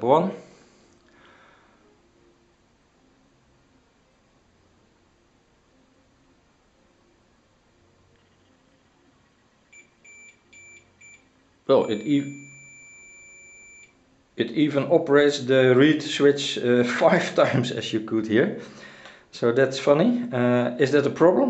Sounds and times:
Speech: 0.0 - 0.4, 11.7 - 12.4, 14.4 - 18.6, 19.4 - 21.5
Inside, small room: 0.0 - 21.5
Buzzer: 9.8 - 14.0.

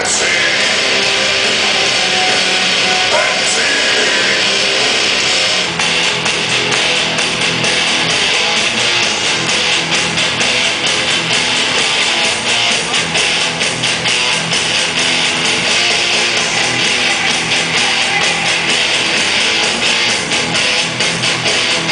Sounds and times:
Pop music: 0.0 - 21.9.

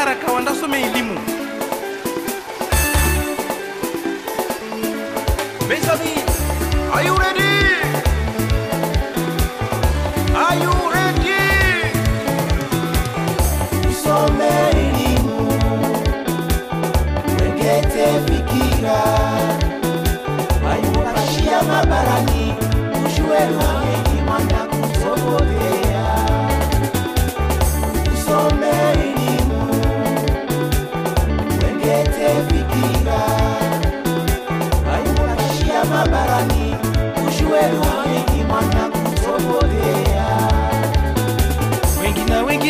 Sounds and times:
Happy music: 0.0 - 42.6.

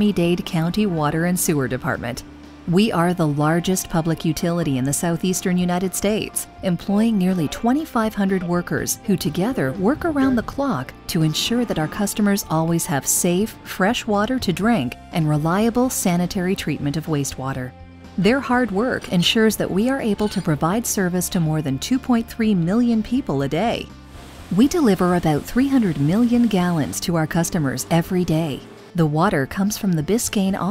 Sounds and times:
Speech: 0.0 - 23.9, 24.6 - 30.7
Music: 0.0 - 30.7.

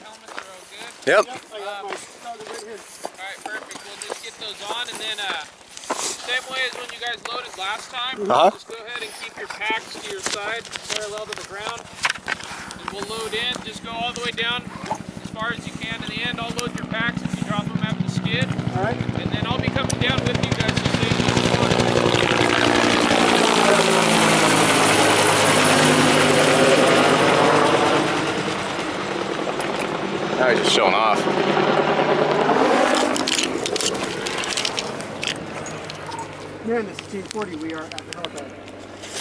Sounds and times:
Speech: 0.0 - 5.5, 15.4 - 22.2
Helicopter: 0.3 - 39.2.

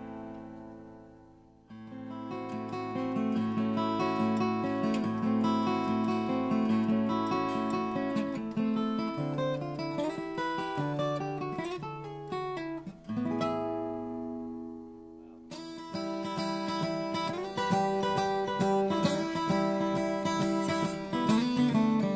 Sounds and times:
Guitar: 0.0 - 22.1.

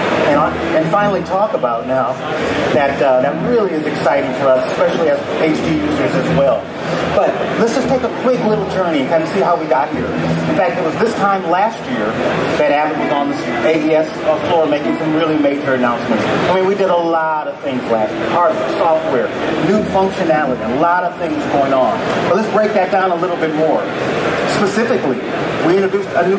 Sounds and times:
Speech: 0.2 - 26.3.

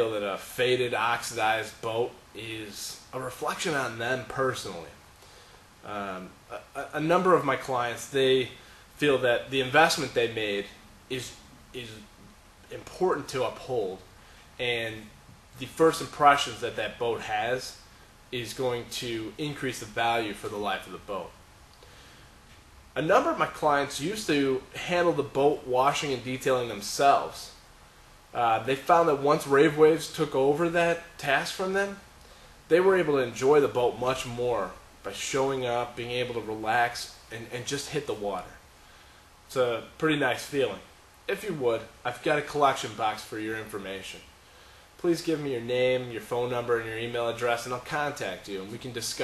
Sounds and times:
Speech: 0.0 - 5.0, 5.8 - 12.1, 12.7 - 21.4, 23.0 - 27.6, 28.3 - 32.1, 32.7 - 38.6, 39.5 - 44.3, 45.0 - 49.2.

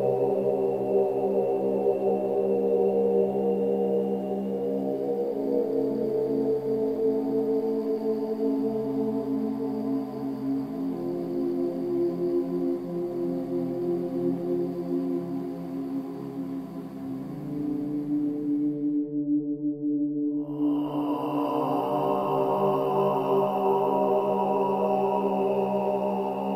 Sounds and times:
Mantra: 0.0 - 18.6, 20.4 - 26.5.

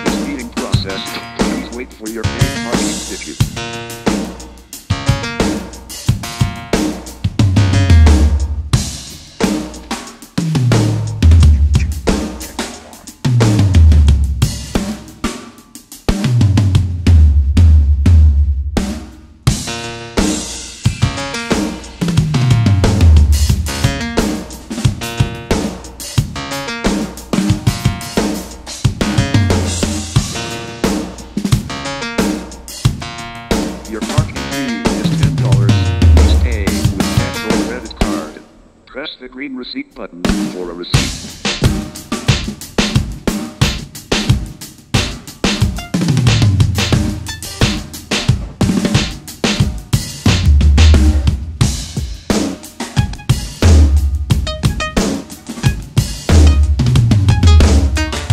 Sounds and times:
Bass drum: 0.0 - 15.0, 16.2 - 19.8, 20.9 - 26.4, 27.3 - 31.8, 32.9 - 38.0, 41.0 - 52.4, 53.0 - 58.3
Drum kit: 0.0 - 38.4, 40.2 - 58.3.

